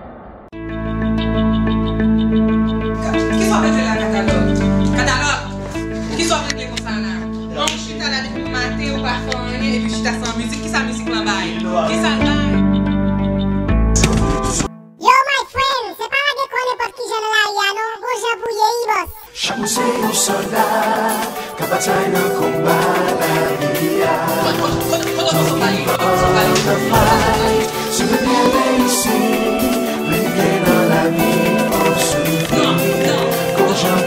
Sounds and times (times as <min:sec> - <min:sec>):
Music: 0:00.6 - 0:15.0, 0:19.4 - 0:34.0.